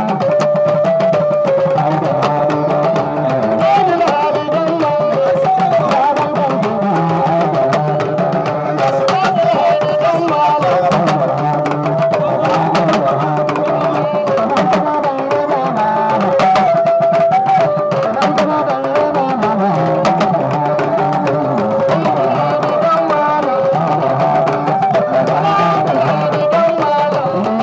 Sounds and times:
Traditional music: 0.0s - 27.6s.

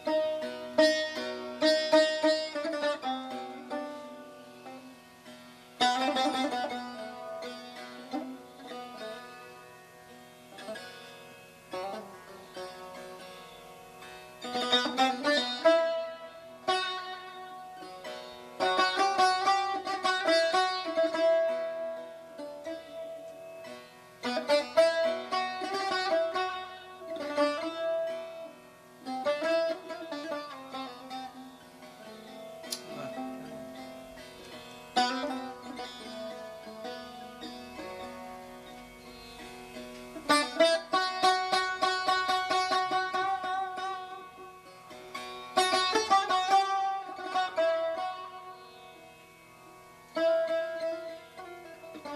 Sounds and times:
Guitar: 0.0s - 52.1s
Sitar: 0.0s - 52.1s.

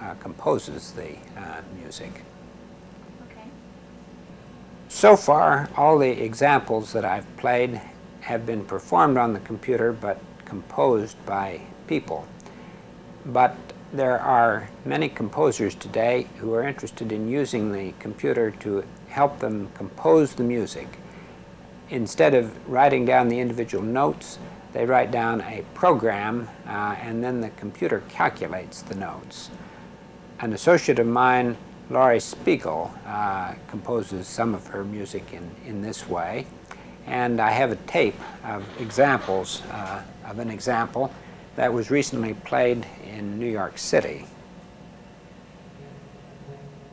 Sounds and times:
Speech: 0.0s - 2.3s, 3.2s - 3.6s, 4.9s - 12.3s, 13.3s - 21.0s, 21.9s - 29.6s, 30.4s - 36.5s, 37.1s - 44.3s.

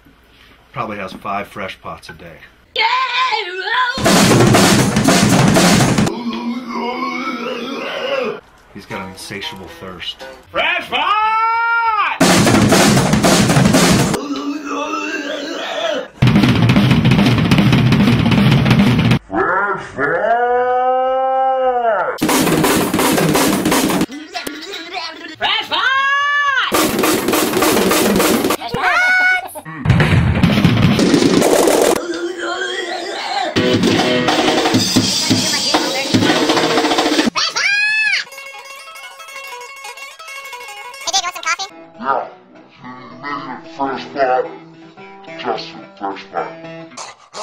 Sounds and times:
Drum roll: 4.0s - 6.2s, 12.2s - 14.2s, 16.2s - 19.2s, 22.2s - 24.1s, 26.7s - 28.6s, 29.8s - 32.0s, 33.6s - 37.4s.

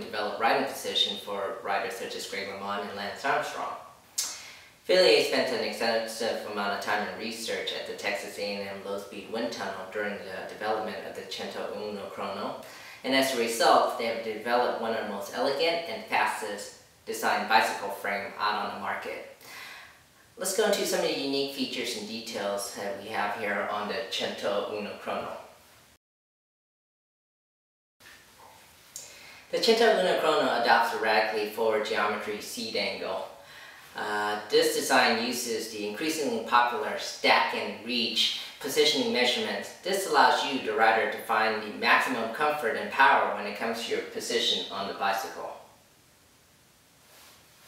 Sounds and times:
Speech: 0.0s - 19.3s, 20.4s - 25.5s, 29.5s - 33.4s, 34.0s - 45.8s.

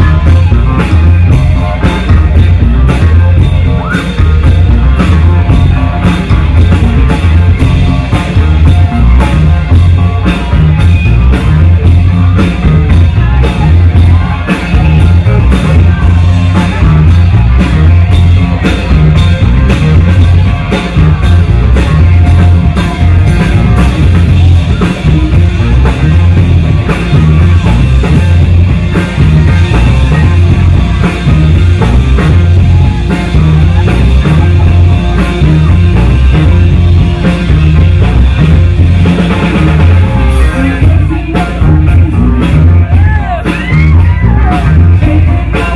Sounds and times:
Disco: 0.0s - 45.7s.

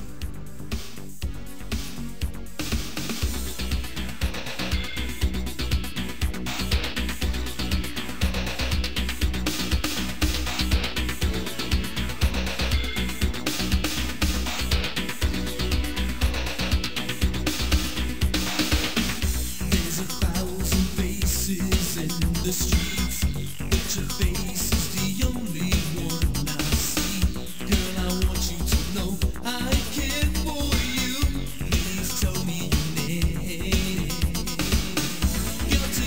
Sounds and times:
House music: 0.0s - 36.0s.

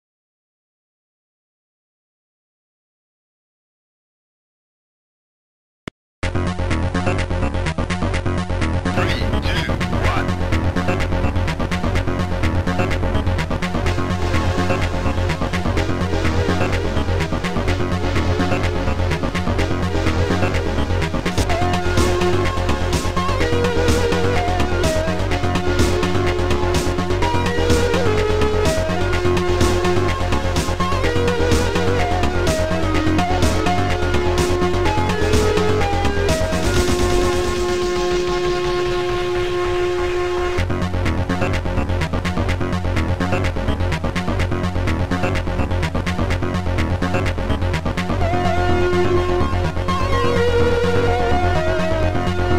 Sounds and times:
Music: 6.2s - 52.5s.

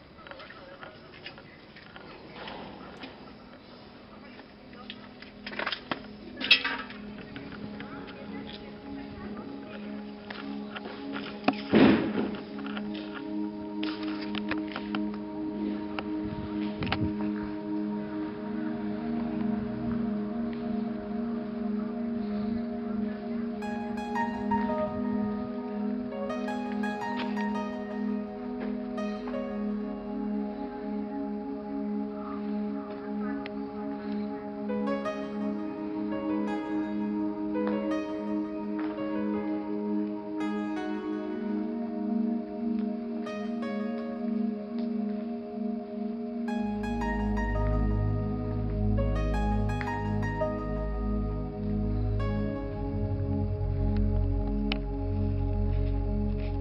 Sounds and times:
Speech: 0.0s - 5.2s, 6.2s - 10.6s
Music: 0.0s - 56.6s.

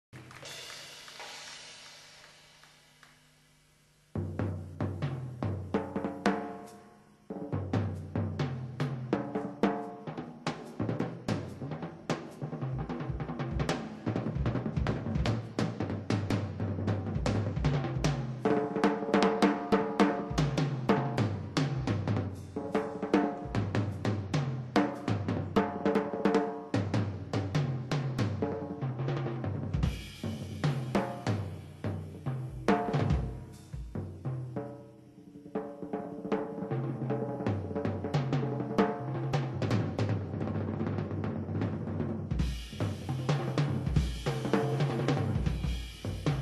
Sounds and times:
Drum kit: 0.1s - 3.3s, 4.1s - 46.4s
Drum: 0.1s - 3.4s, 4.1s - 46.4s.

